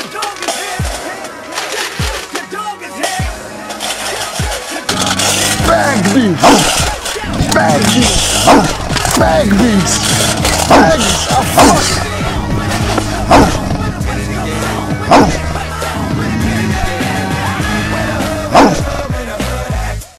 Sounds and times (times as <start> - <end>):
Music: 0.0 - 20.1
Bow-wow: 13.3 - 13.6, 15.1 - 15.4, 18.5 - 18.9.